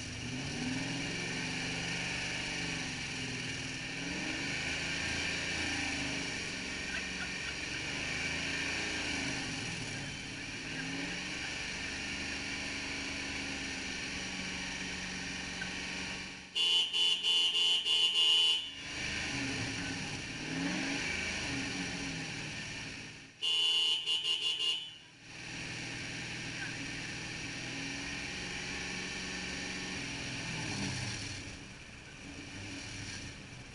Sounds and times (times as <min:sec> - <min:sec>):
Car: 0:00.0 - 0:33.7
Engine: 0:00.0 - 0:33.7
Outside, rural or natural: 0:00.0 - 0:33.7.